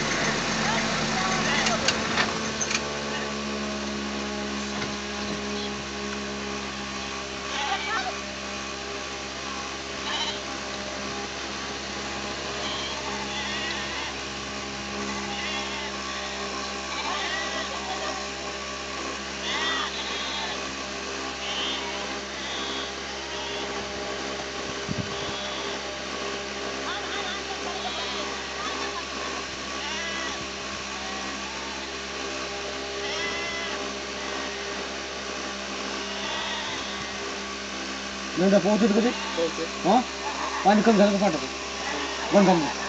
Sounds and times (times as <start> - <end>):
Bleat: 7.5 - 8.1, 10.0 - 10.5, 12.5 - 14.2, 15.0 - 18.3, 19.4 - 20.7, 21.4 - 23.9, 25.0 - 25.9, 27.1 - 29.0, 29.7 - 32.0, 32.9 - 34.8, 35.9 - 37.3, 38.8 - 39.7, 41.7 - 42.7.